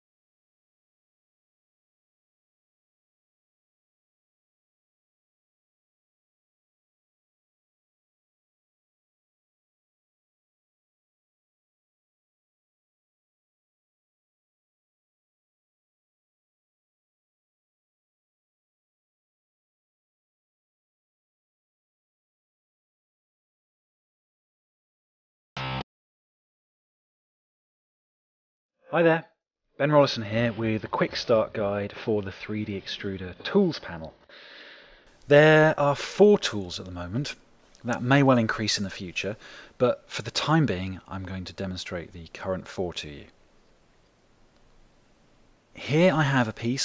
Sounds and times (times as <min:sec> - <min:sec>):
Music: 0:25.6 - 0:25.8
Speech: 0:28.9 - 0:34.2, 0:35.3 - 0:43.4, 0:45.8 - 0:46.8.